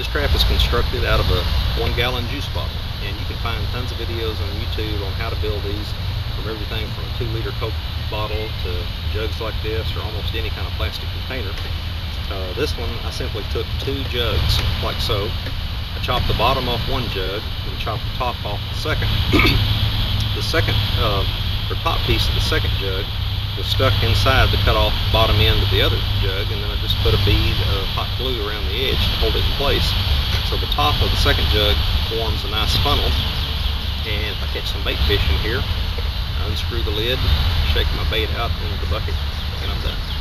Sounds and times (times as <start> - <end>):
Speech: 0.0 - 11.7, 12.3 - 15.4, 16.0 - 19.6, 20.2 - 33.3, 34.1 - 35.7, 36.4 - 40.0
Outside, urban or manmade: 0.0 - 40.2.